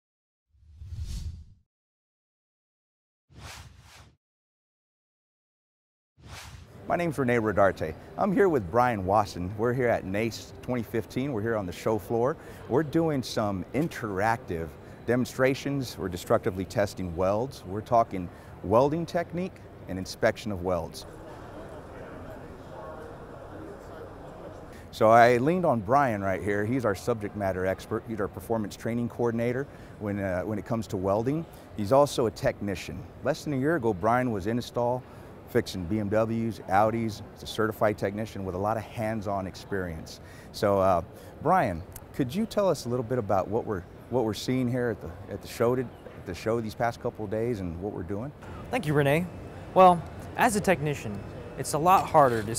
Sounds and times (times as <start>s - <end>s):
Speech: 6.9s - 52.5s.